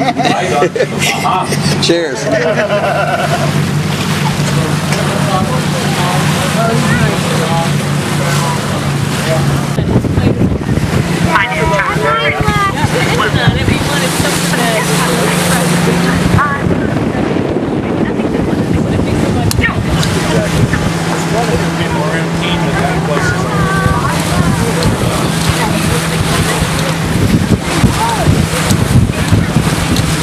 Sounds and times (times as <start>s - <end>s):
Motorboat, speedboat: 0.0s - 30.2s
Speech: 4.2s - 27.1s.